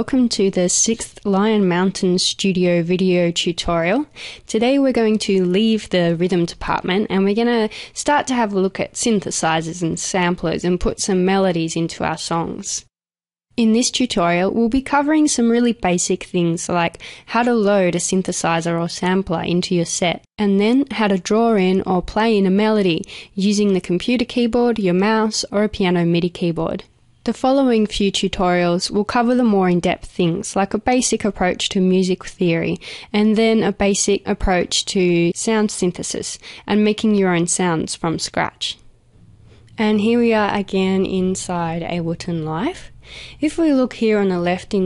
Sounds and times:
Speech: 0.0 - 12.9, 13.6 - 38.8, 39.8 - 44.8.

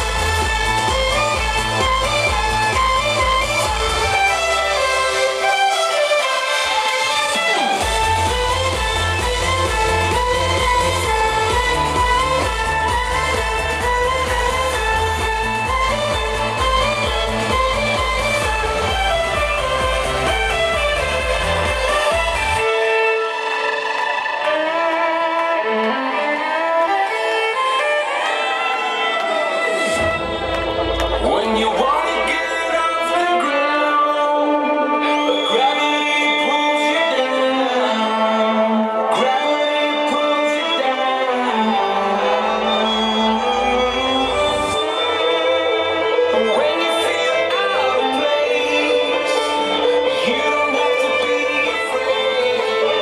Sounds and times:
Violin, fiddle: 0.0 - 53.0.

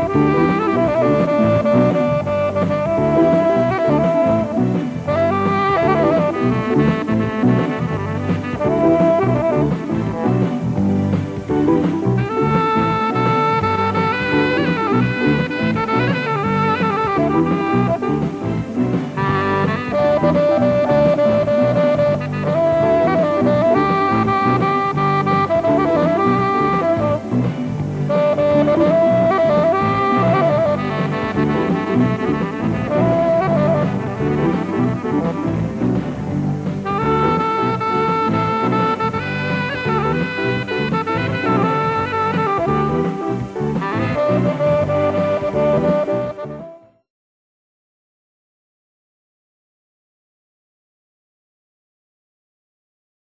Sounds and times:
Music: 0.0 - 47.1.

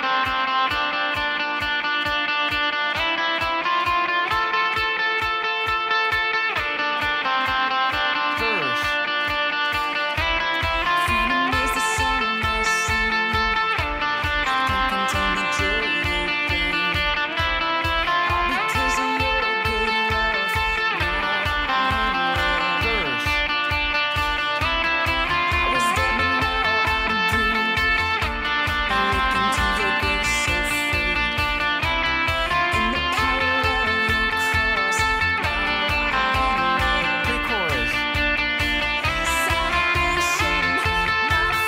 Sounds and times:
Electric guitar: 0.0 - 41.6.

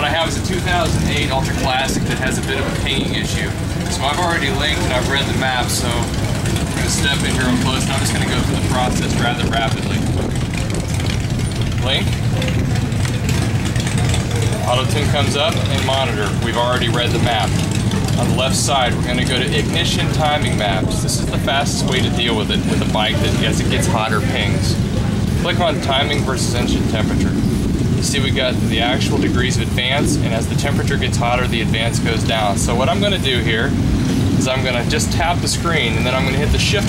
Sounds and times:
Speech: 0.0 - 10.3, 11.7 - 12.6, 14.4 - 33.8, 34.4 - 36.8.

